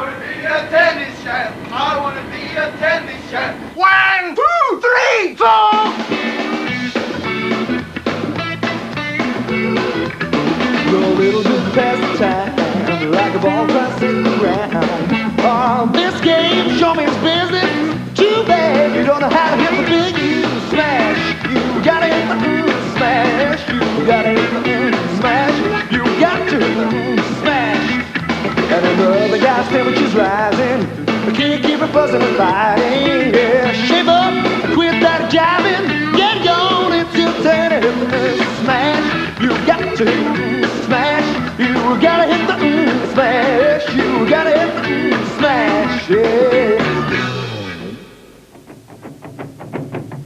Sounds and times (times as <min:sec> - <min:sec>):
Music: 0:05.5 - 0:50.2.